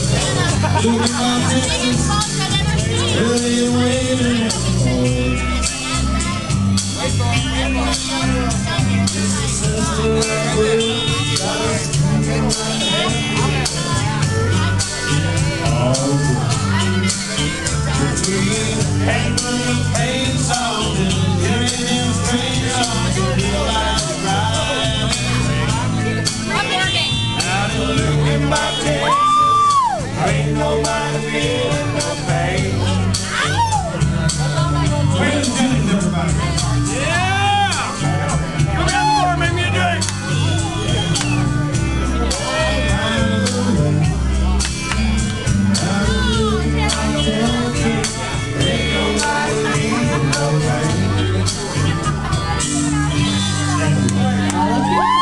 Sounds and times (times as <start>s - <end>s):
Male singing: 0.0s - 6.2s, 7.0s - 26.2s, 27.4s - 40.0s, 42.2s - 44.3s, 45.7s - 52.6s
Music: 0.0s - 55.2s.